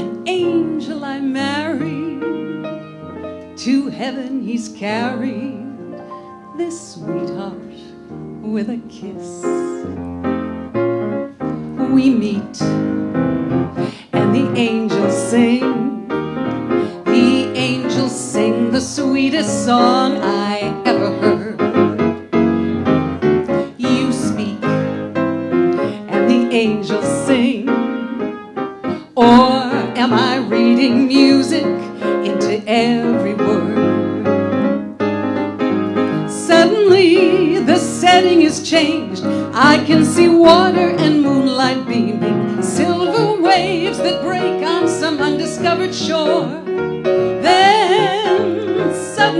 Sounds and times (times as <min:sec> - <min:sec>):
Music: 0:00.0 - 0:49.3
Female singing: 0:03.6 - 0:05.6, 0:17.1 - 0:21.5, 0:23.8 - 0:24.8, 0:29.2 - 0:34.0, 0:36.3 - 0:46.6, 0:47.4 - 0:49.3.